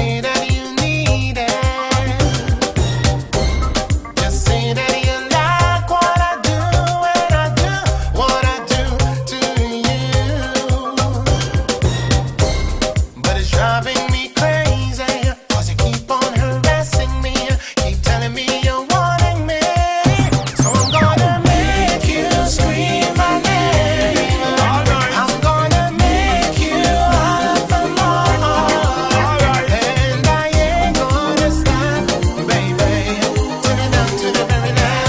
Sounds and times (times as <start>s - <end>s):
Afrobeat: 0.0s - 35.0s
Reggae: 0.0s - 35.0s.